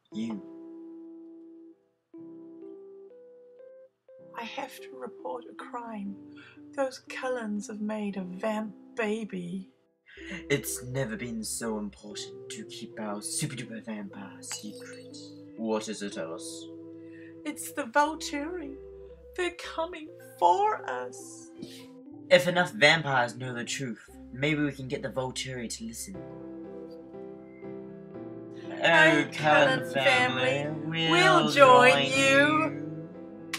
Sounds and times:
Music: 0:00.0 - 0:33.5
Speech: 0:00.2 - 0:00.4, 0:04.4 - 0:06.2, 0:06.8 - 0:09.6, 0:10.2 - 0:16.6, 0:17.5 - 0:18.7, 0:19.4 - 0:21.4, 0:22.3 - 0:26.2, 0:28.7 - 0:32.7.

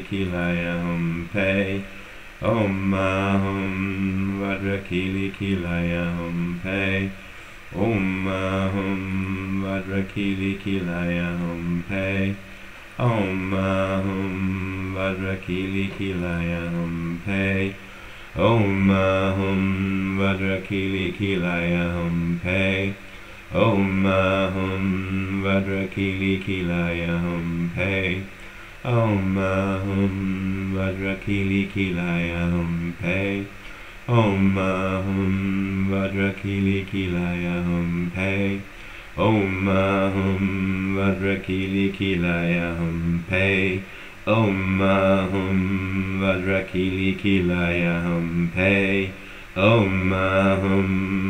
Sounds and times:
Mantra: 0:00.0 - 0:51.2.

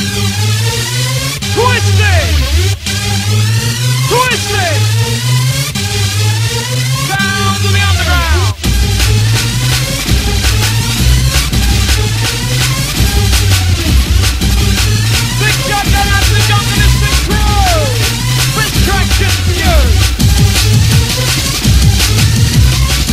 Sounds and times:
Electronic dance music: 0:00.0 - 0:23.1.

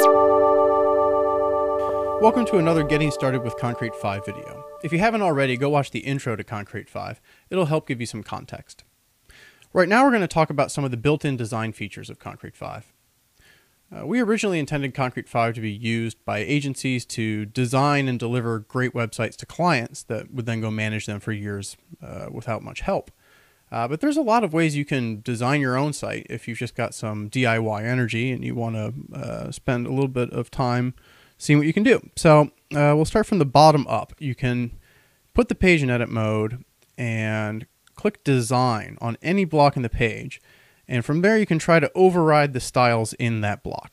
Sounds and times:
Speech: 0:02.2 - 0:08.9, 0:09.7 - 0:13.0, 0:13.9 - 0:34.8, 0:35.4 - 0:43.9.

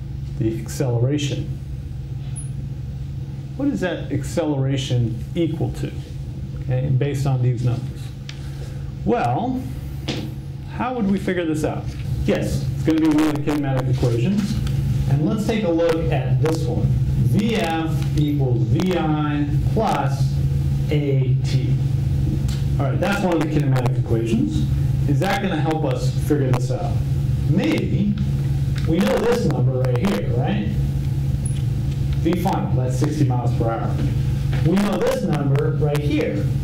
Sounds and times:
Speech: 0:00.4 - 0:01.6, 0:03.6 - 0:08.1, 0:09.0 - 0:09.7, 0:10.7 - 0:21.8, 0:22.8 - 0:28.2, 0:28.9 - 0:30.8, 0:32.2 - 0:36.5.

